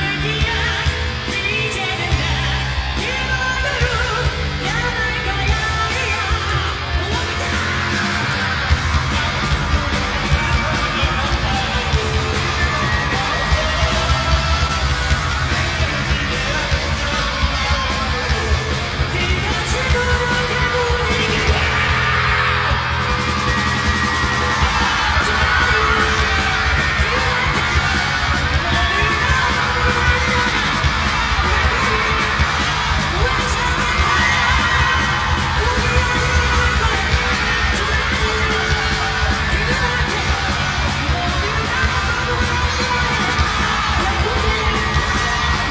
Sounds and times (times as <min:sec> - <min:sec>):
Music: 0:00.0 - 0:45.7
Shout: 0:00.0 - 0:45.7.